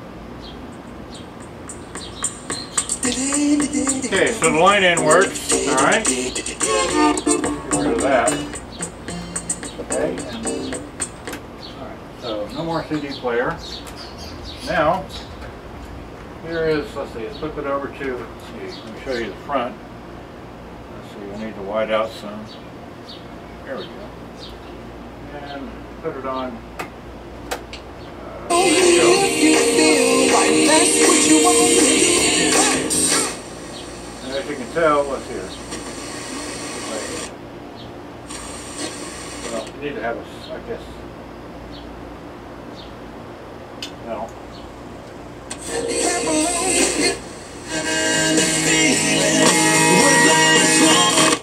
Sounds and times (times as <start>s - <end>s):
Music: 2.0s - 11.2s, 28.5s - 34.0s, 45.6s - 51.4s
Speech: 4.1s - 7.0s, 9.8s - 10.8s, 11.8s - 13.7s, 14.6s - 15.3s, 16.4s - 19.8s, 20.9s - 22.5s, 23.6s - 24.2s, 25.2s - 26.7s, 34.2s - 35.6s, 36.7s - 37.3s, 39.5s - 41.0s, 44.0s - 44.4s.